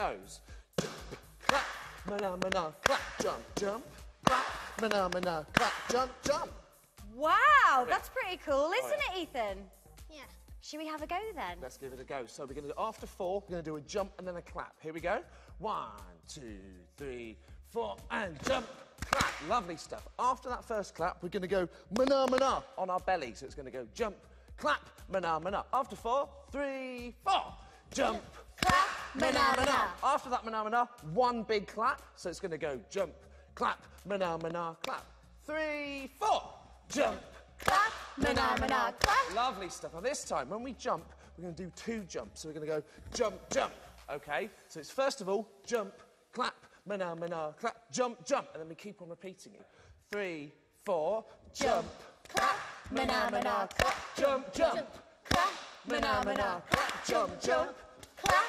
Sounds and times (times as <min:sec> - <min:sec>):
Music: 0:00.0 - 0:58.4.